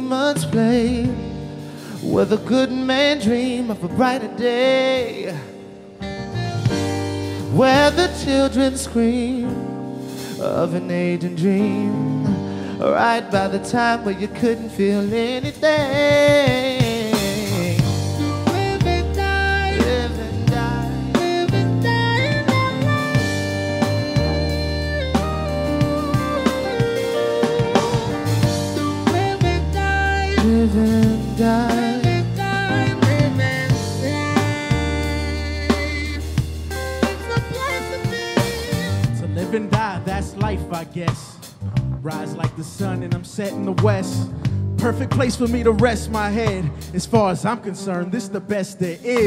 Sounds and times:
Music: 0.0 - 49.2.

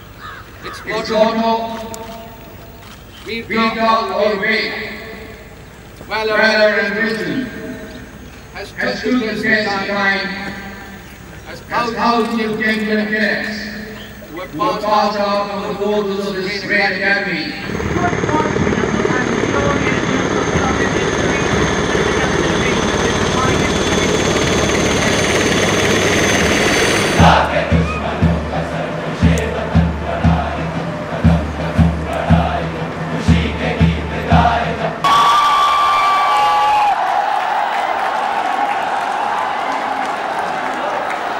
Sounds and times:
Helicopter: 17.5 - 27.9.

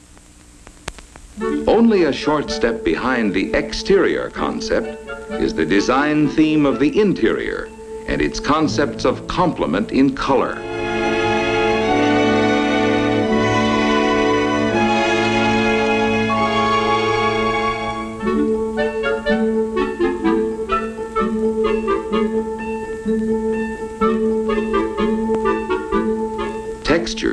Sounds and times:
Music: 1.3 - 27.3.

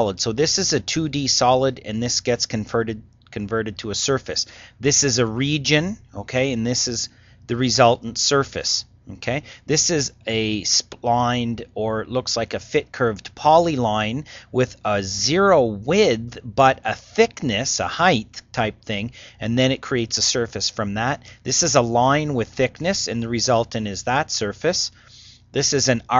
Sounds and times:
Narration, monologue: 0.0 - 26.1.

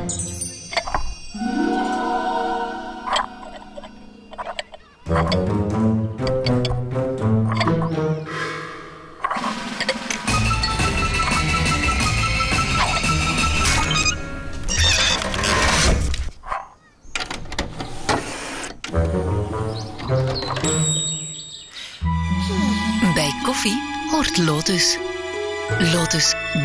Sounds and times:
Music: 0.0 - 4.1, 5.0 - 9.0, 9.7 - 14.7, 18.9 - 26.6.

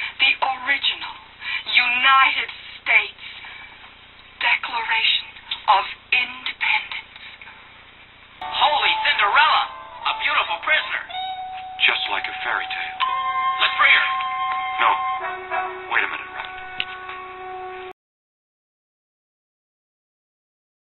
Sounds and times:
Television: 0.0 - 18.0
Speech: 0.2 - 3.3, 4.4 - 7.1, 8.5 - 11.1, 11.8 - 13.0, 15.9 - 16.5
Music: 8.4 - 18.0.

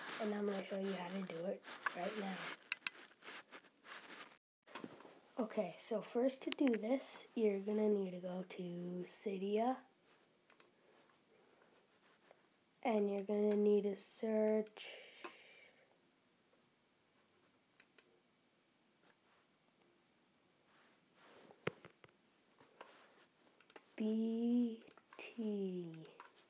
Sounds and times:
Speech: 0.1 - 2.6, 5.4 - 9.9, 12.8 - 15.1, 24.0 - 26.2.

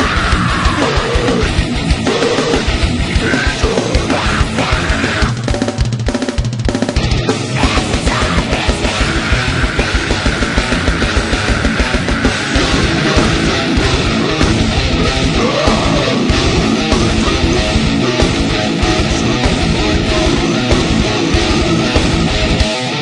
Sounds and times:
Angry music: 0.0 - 23.0
Heavy metal: 0.0 - 23.0.

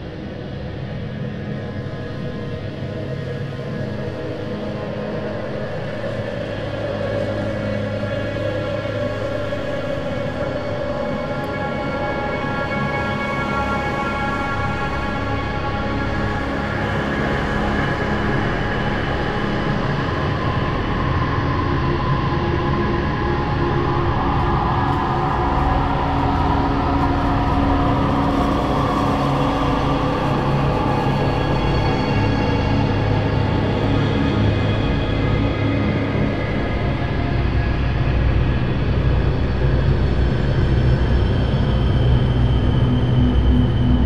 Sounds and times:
Scary music: 8.6 - 44.0.

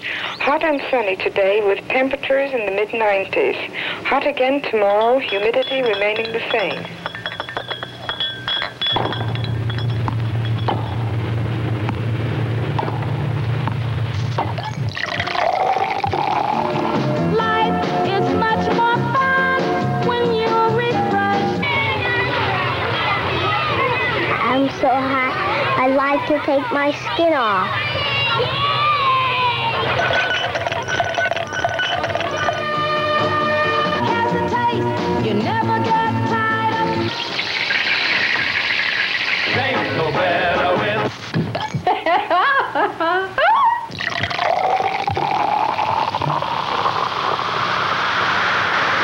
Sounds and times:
Music: 16.0 - 25.8, 31.4 - 37.3, 39.5 - 41.2
Hubbub, speech noise, speech babble: 21.8 - 30.2.

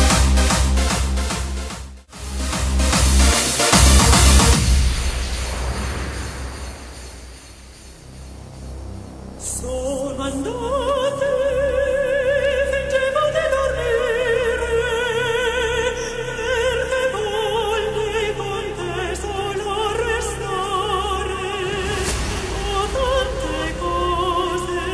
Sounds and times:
Music: 0.0 - 24.9.

